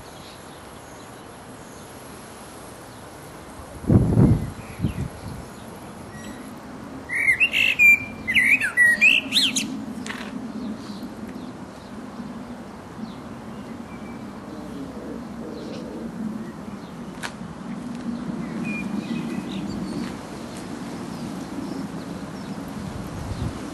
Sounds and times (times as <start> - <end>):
Chirp, tweet: 7.1 - 11.9, 13.0 - 14.2.